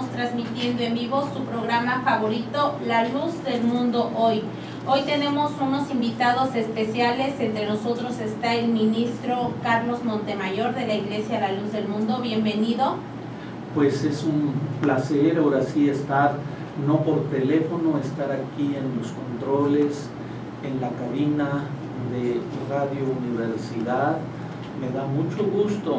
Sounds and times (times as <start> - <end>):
Speech: 0.0 - 13.0, 13.8 - 25.9.